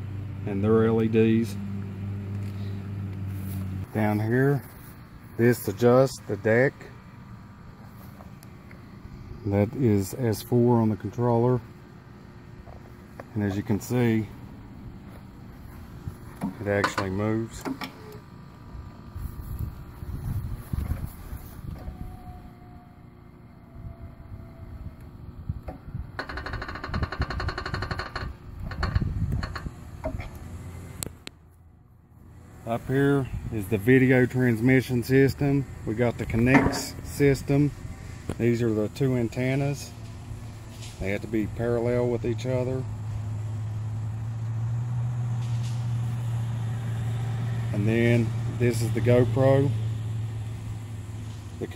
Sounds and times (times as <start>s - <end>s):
Speech: 0.4s - 1.6s, 3.9s - 4.7s, 5.4s - 7.0s, 9.4s - 11.7s, 13.3s - 14.4s, 16.4s - 17.8s, 32.6s - 40.0s, 41.0s - 42.9s, 47.7s - 49.8s.